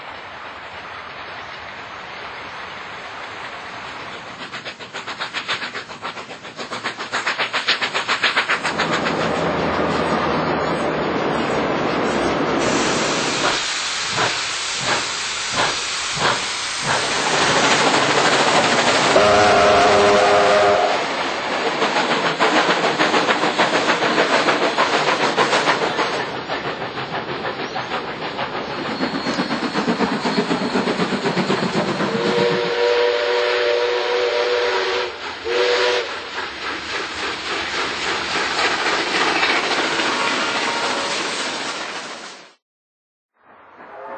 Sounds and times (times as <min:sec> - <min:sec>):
Outside, rural or natural: 0:00.0 - 0:42.6, 0:43.3 - 0:44.1
Train: 0:00.0 - 0:42.6, 0:43.4 - 0:44.1.